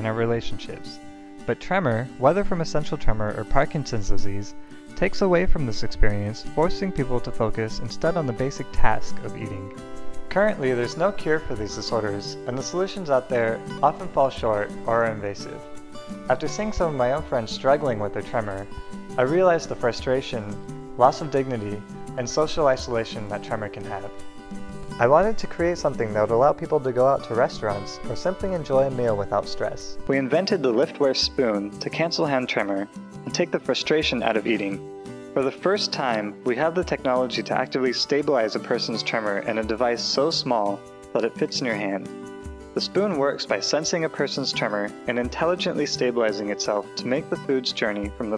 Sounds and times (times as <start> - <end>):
Speech: 0.0 - 15.7, 16.3 - 24.2, 25.0 - 34.8, 35.4 - 42.1, 42.8 - 48.3
Music: 0.0 - 48.3.